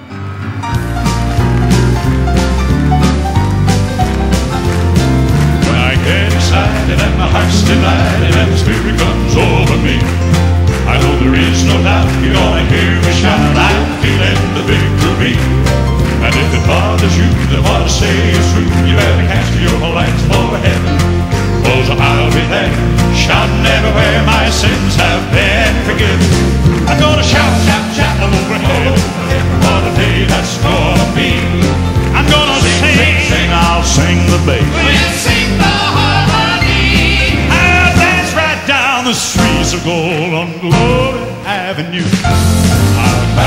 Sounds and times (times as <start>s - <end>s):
Music: 0.0s - 43.4s.